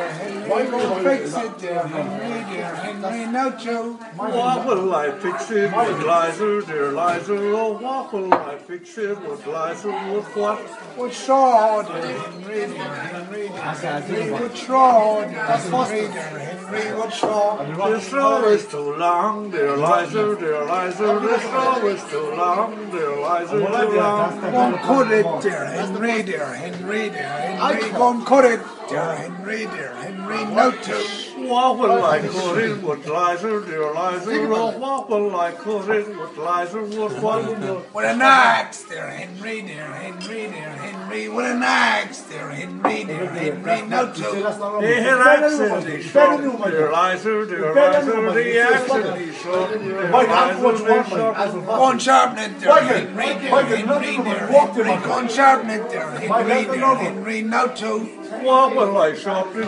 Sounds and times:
Male singing: 0.0 - 59.6
Speech: 0.0 - 59.6.

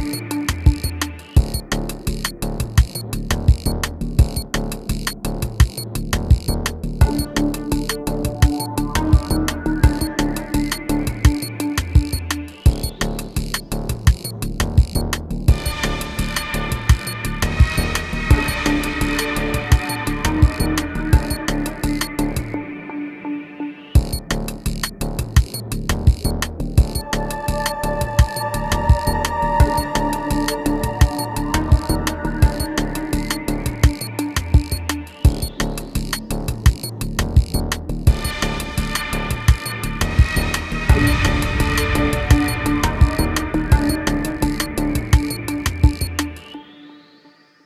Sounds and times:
Soundtrack music: 0.0 - 47.6.

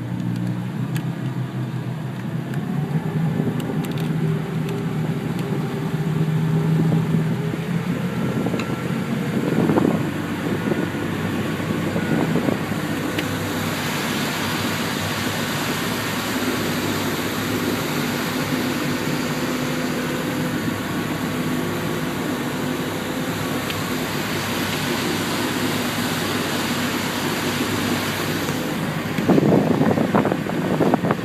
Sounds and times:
Motorboat, speedboat: 0.0 - 31.2.

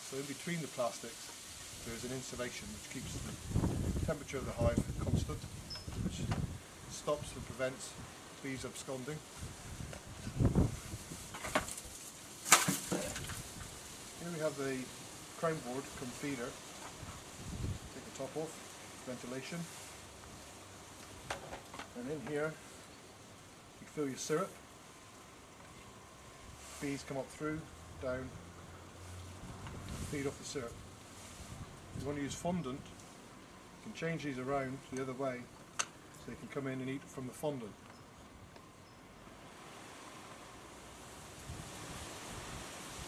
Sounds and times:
Speech: 0.0 - 3.4, 4.0 - 9.3, 12.9 - 13.2, 14.2 - 16.6, 17.9 - 19.8, 21.9 - 22.6, 23.8 - 24.6, 26.8 - 28.4, 30.0 - 30.8, 32.0 - 33.0, 33.8 - 35.5, 36.2 - 37.8.

